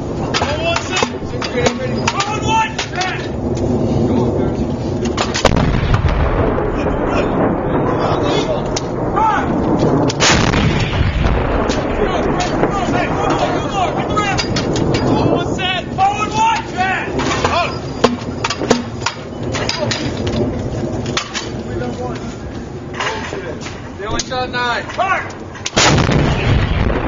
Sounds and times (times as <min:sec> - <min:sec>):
Artillery fire: 0:05.0 - 0:16.4, 0:25.7 - 0:27.0.